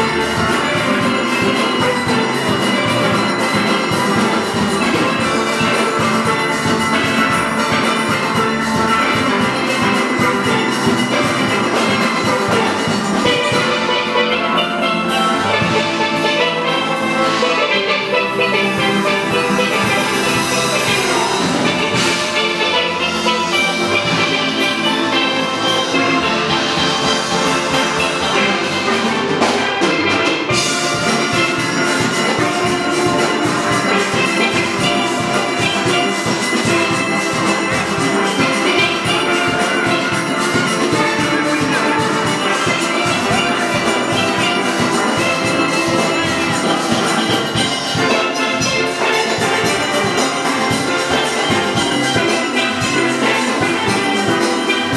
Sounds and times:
Drum: 0:00.0 - 0:54.9
Drum kit: 0:00.0 - 0:54.9
Steelpan: 0:00.0 - 0:54.9.

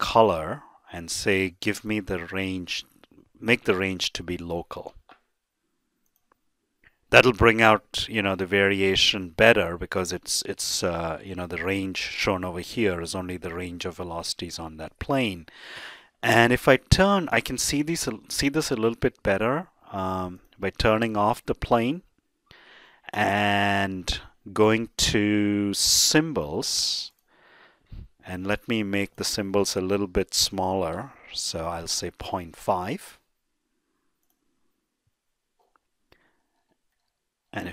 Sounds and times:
Speech: 0:00.0 - 0:05.0, 0:07.1 - 0:15.5, 0:16.2 - 0:22.1, 0:23.1 - 0:27.2, 0:28.2 - 0:33.3, 0:37.5 - 0:37.7.

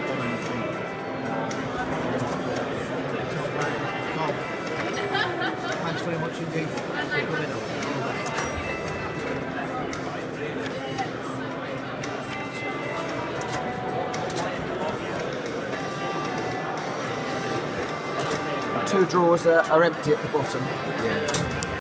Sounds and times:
Music: 0:00.0 - 0:21.8.

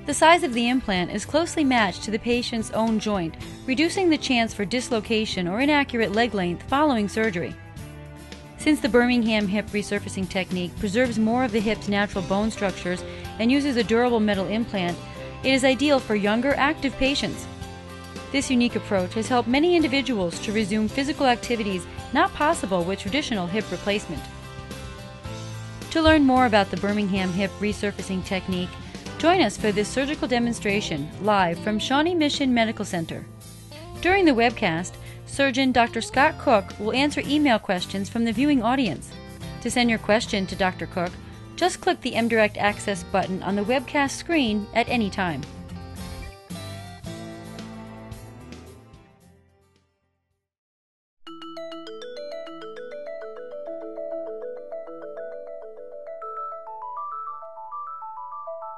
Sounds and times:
Glockenspiel: 0:51.3 - 0:58.7.

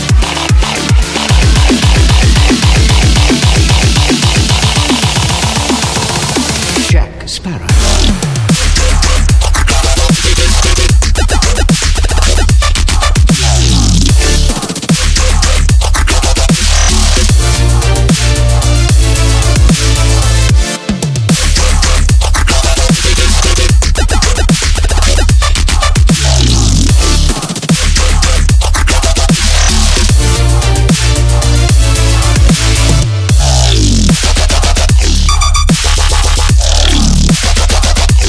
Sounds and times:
Dubstep: 0:00.0 - 0:38.2.

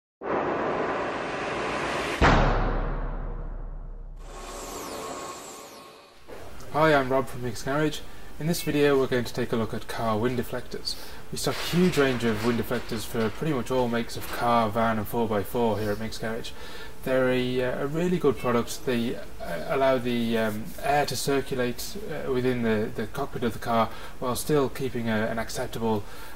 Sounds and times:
Speech: 0:06.6 - 0:26.1.

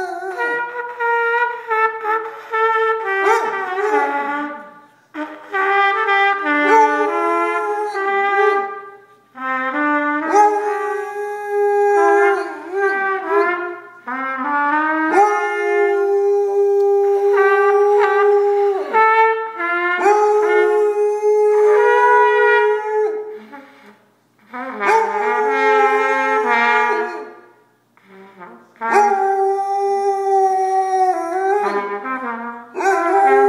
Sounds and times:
Trumpet: 0:00.0 - 0:33.4.

